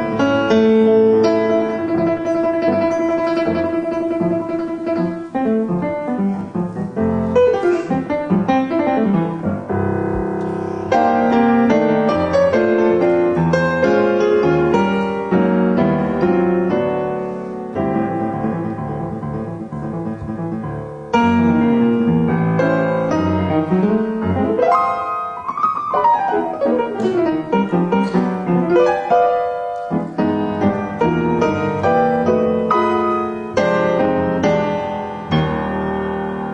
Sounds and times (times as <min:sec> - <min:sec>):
Piano: 0:00.0 - 0:36.5.